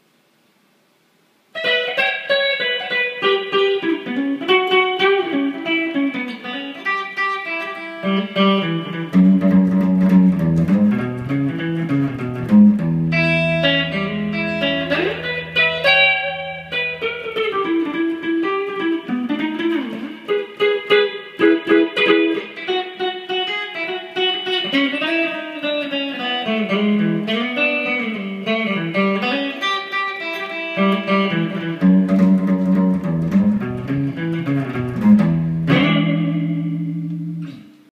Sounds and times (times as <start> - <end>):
Acoustic guitar: 1.6 - 37.8
Strum: 6.2 - 25.4, 26.2 - 37.9.